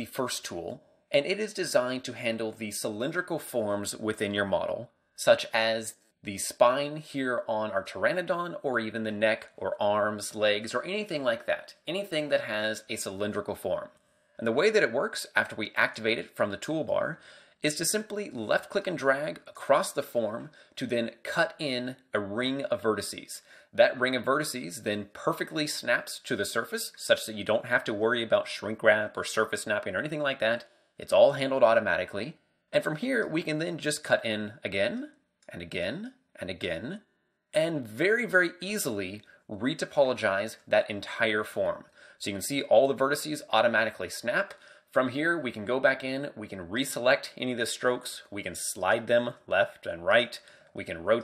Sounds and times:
Speech: 0:00.0 - 0:51.2.

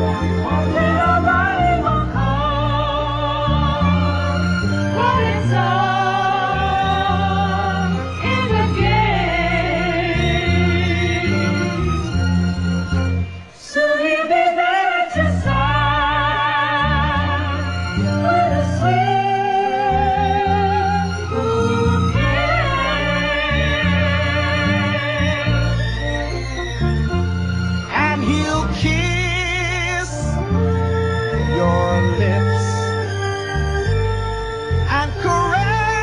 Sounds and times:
Music: 0:00.0 - 0:36.0.

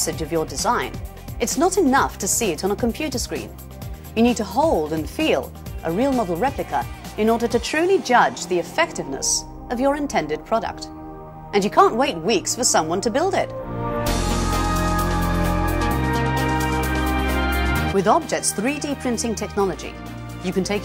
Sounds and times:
Speech: 0:00.0 - 0:03.5, 0:04.2 - 0:10.9, 0:11.6 - 0:13.5, 0:18.0 - 0:20.8
Music: 0:00.0 - 0:20.8.

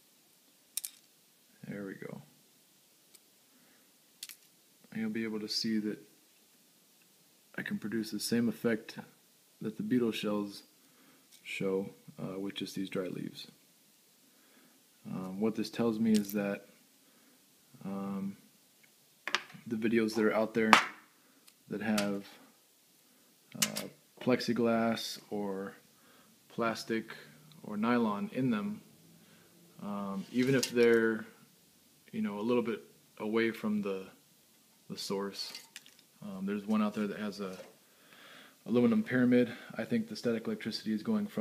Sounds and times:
Speech: 0:01.6 - 0:02.3, 0:04.9 - 0:06.1, 0:07.5 - 0:10.7, 0:11.4 - 0:13.6, 0:15.0 - 0:16.7, 0:17.8 - 0:18.4, 0:19.6 - 0:20.8, 0:21.7 - 0:22.4, 0:23.6 - 0:25.8, 0:26.5 - 0:28.8, 0:29.8 - 0:31.4, 0:32.1 - 0:34.2, 0:34.9 - 0:37.7, 0:38.6 - 0:41.4.

